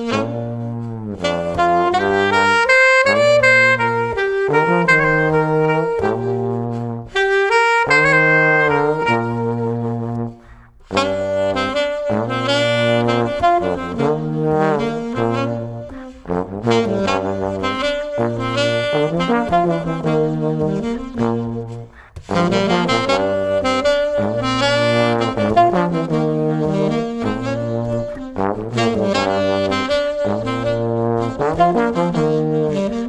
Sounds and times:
Saxophone: 0:00.0 - 0:33.0
Trombone: 0:00.0 - 0:33.0
Trumpet: 0:00.0 - 0:33.0.

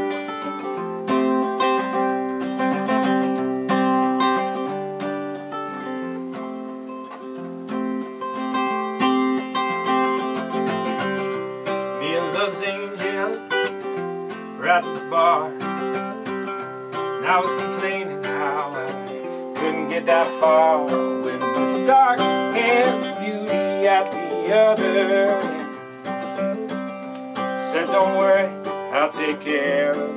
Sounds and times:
Music: 0:00.0 - 0:30.1.

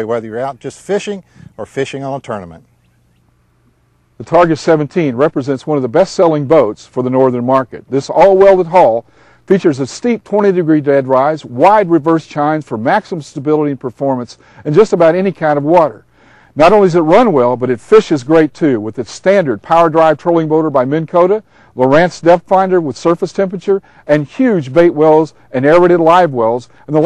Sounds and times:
Speech: 0:00.0 - 0:02.7, 0:04.2 - 0:16.0, 0:16.6 - 0:27.0.

